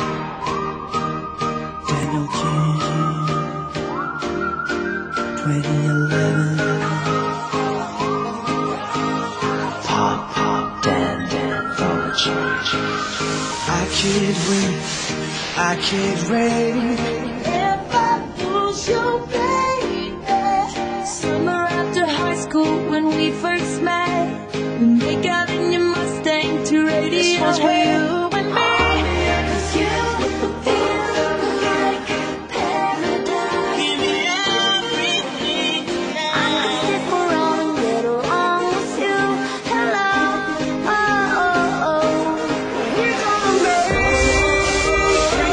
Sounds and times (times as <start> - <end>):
Music: 0.0 - 45.5.